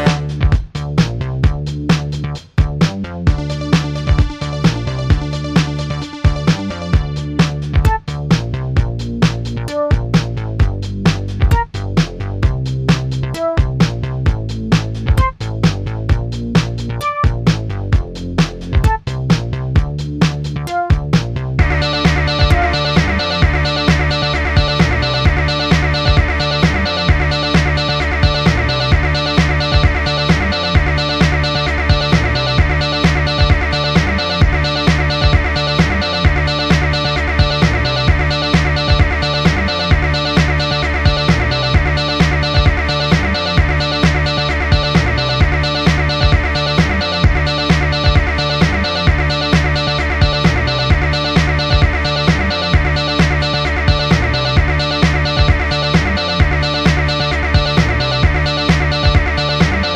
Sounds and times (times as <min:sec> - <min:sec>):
Music: 0:00.0 - 0:59.9.